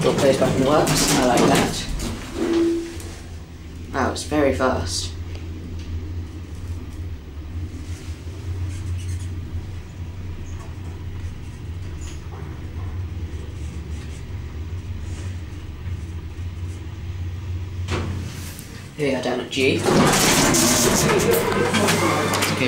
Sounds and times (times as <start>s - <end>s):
Speech: 0.0s - 2.0s, 3.9s - 5.2s, 19.0s - 20.1s, 20.8s - 22.6s.